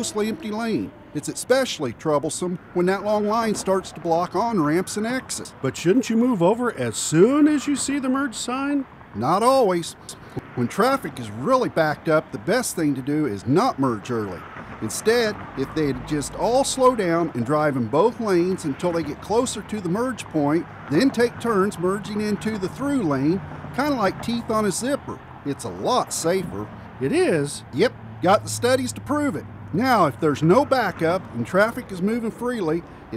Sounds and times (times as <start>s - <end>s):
Speech: 0.0s - 33.1s.